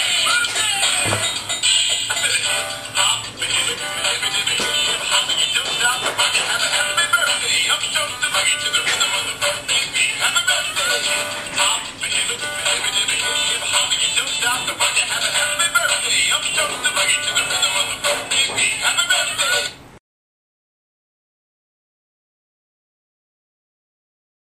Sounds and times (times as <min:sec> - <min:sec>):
Music: 0:00.0 - 0:19.8.